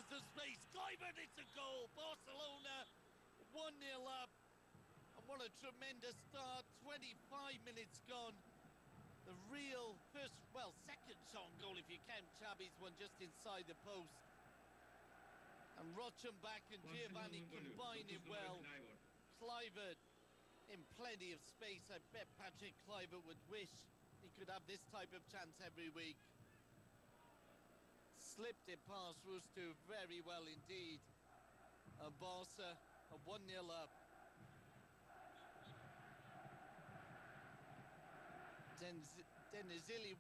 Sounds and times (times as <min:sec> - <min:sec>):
Speech: 0:00.0 - 0:02.9, 0:03.5 - 0:04.3, 0:05.2 - 0:08.4, 0:09.3 - 0:14.2, 0:15.8 - 0:20.0, 0:20.7 - 0:26.3, 0:28.2 - 0:31.0, 0:32.0 - 0:33.9, 0:38.8 - 0:40.2.